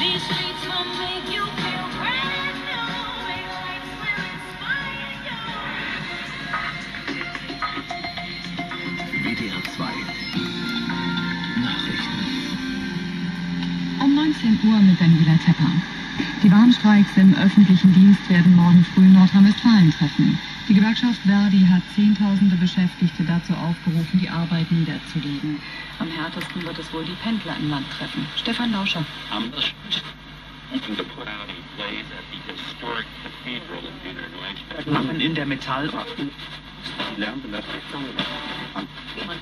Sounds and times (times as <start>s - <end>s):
Radio: 0.0s - 39.4s
Speech: 9.2s - 10.1s, 14.0s - 39.4s.